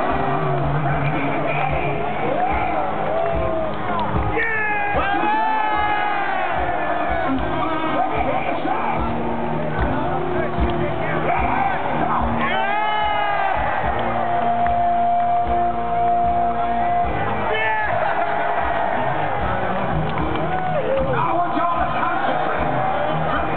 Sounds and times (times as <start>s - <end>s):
Music: 0.0s - 23.5s.